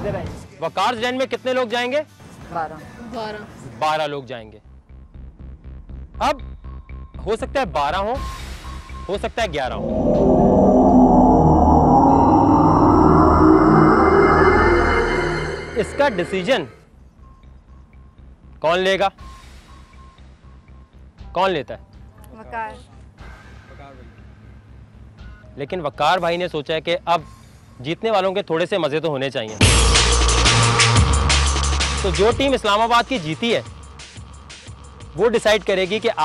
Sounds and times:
Music: 4.1s - 10.4s, 14.0s - 36.2s.

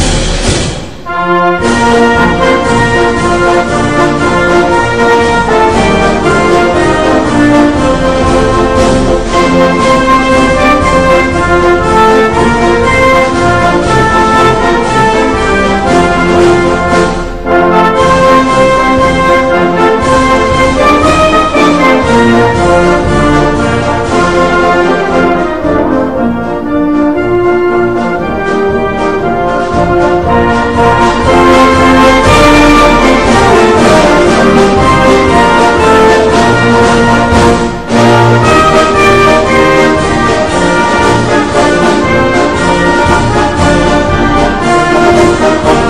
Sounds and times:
Music: 0.0s - 45.8s.

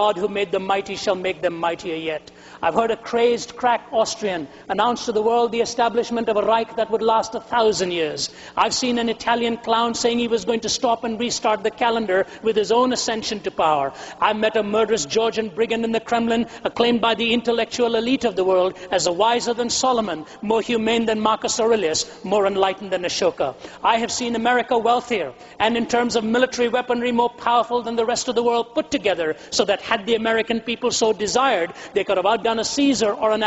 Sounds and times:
Speech: 0.0s - 33.4s.

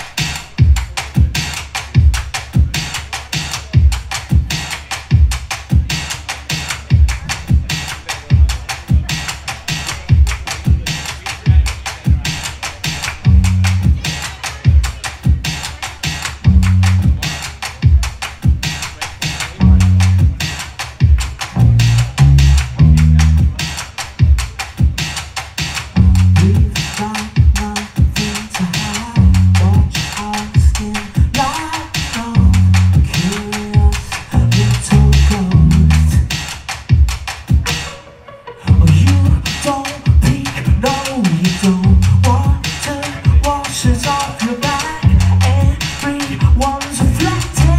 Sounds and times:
Music: 0.0s - 47.7s
Speech: 5.7s - 25.1s, 25.7s - 36.4s, 38.7s - 47.7s.

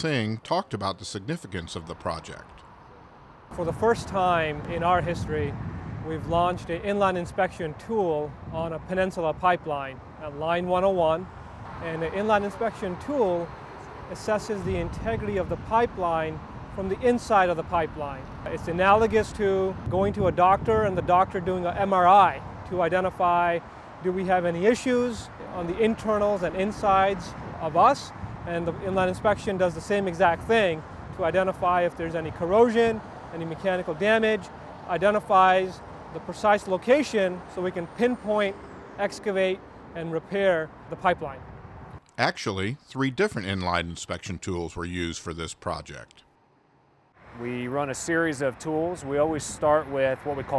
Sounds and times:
Speech: 0.0s - 2.6s, 3.5s - 5.5s, 6.1s - 13.5s, 14.1s - 41.4s, 42.2s - 46.2s, 47.4s - 50.5s.

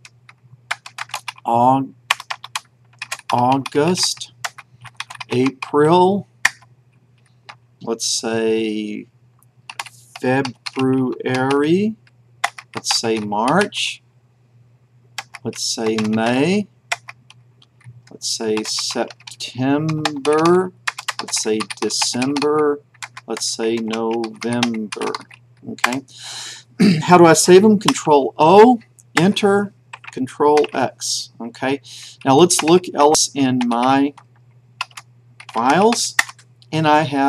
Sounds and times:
Inside, small room: 0.0s - 37.2s
Speech: 1.5s - 2.0s, 3.3s - 4.3s, 5.3s - 6.3s, 7.8s - 9.1s, 10.2s - 12.0s, 12.8s - 14.0s, 15.4s - 16.7s, 18.1s - 26.2s, 26.8s - 34.2s, 35.5s - 37.2s.

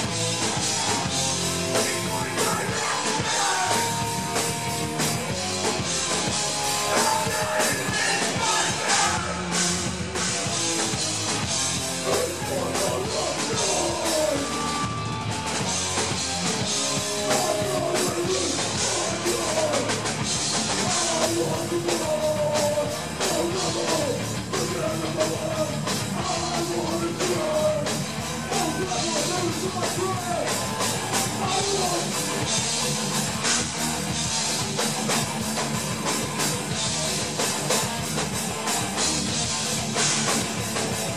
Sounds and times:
Rock music: 0.0s - 41.1s
Singing: 1.8s - 4.2s, 6.8s - 9.6s, 12.0s - 15.2s, 17.1s - 20.0s, 20.8s - 32.2s.

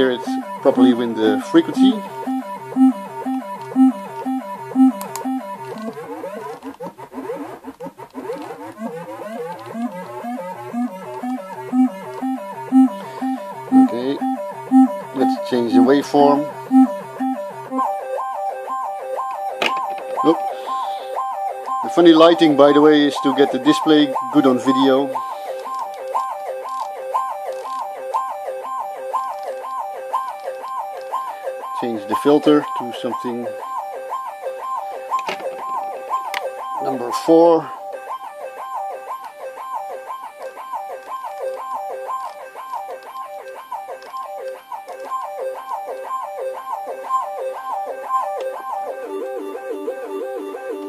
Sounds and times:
Speech: 0.0s - 2.0s, 15.2s - 16.5s, 21.8s - 25.2s, 31.8s - 33.5s, 36.8s - 37.7s
Music: 0.0s - 50.8s.

